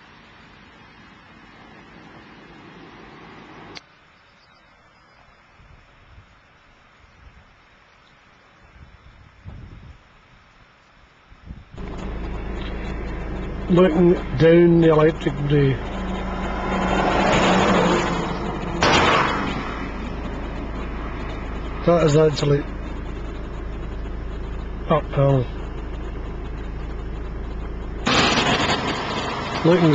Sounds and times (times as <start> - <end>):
Speech: 13.7 - 15.8, 21.8 - 22.7, 24.9 - 25.5, 29.6 - 29.9.